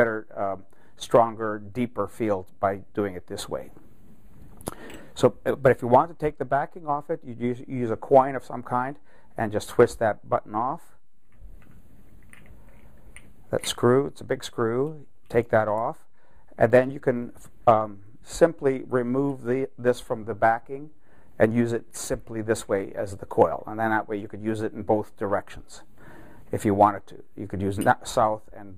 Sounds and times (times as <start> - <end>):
Speech: 0.0 - 3.8, 5.2 - 11.0, 13.5 - 25.9, 26.5 - 28.7.